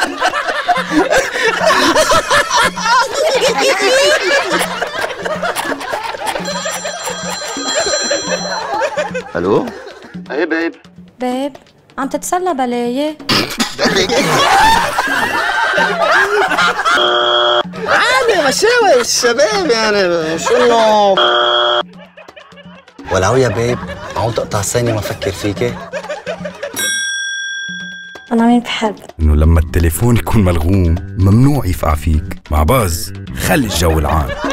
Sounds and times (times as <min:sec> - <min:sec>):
Music: 0:00.0 - 0:34.5
Speech: 0:28.8 - 0:34.4.